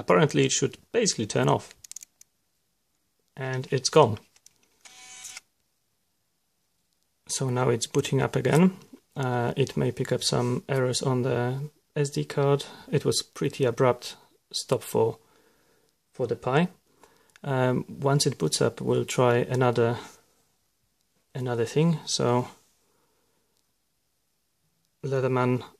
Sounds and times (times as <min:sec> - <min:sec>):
Speech: 0:00.0 - 0:01.8, 0:03.4 - 0:04.3, 0:07.2 - 0:15.2, 0:16.2 - 0:16.8, 0:17.4 - 0:20.2, 0:21.3 - 0:22.6, 0:25.0 - 0:25.7.